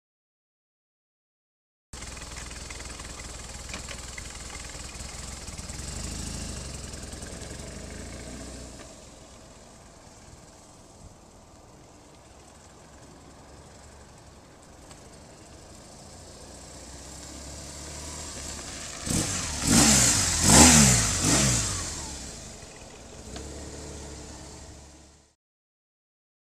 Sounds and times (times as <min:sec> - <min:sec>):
Motorcycle: 0:02.0 - 0:25.4.